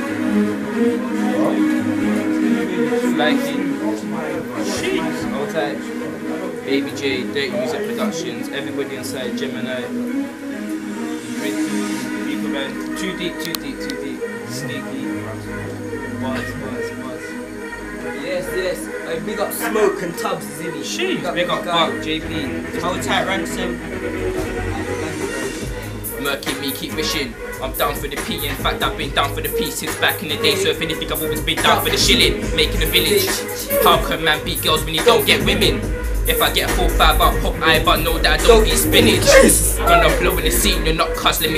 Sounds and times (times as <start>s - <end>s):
Music: 0.0s - 41.5s.